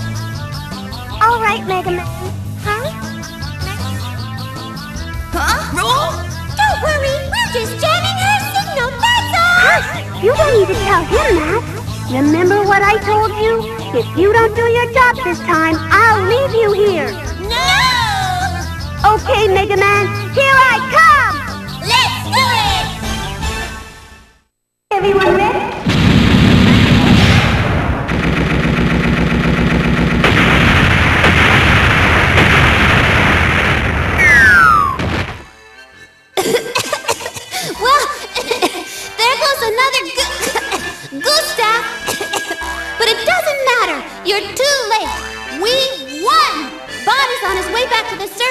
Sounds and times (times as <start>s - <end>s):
Music: 0.0s - 25.9s, 34.3s - 48.5s
Speech: 24.9s - 25.8s, 43.0s - 48.5s.